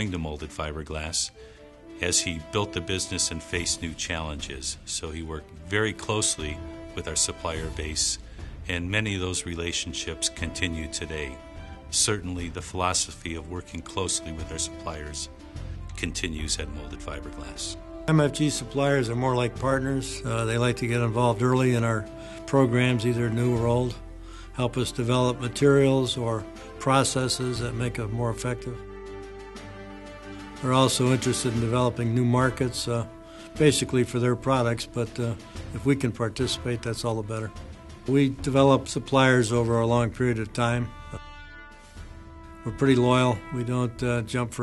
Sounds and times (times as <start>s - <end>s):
Speech: 0.0s - 1.4s, 2.0s - 15.3s, 15.9s - 24.0s, 24.6s - 28.8s, 30.6s - 41.2s, 42.7s - 44.6s
Music: 0.0s - 44.6s.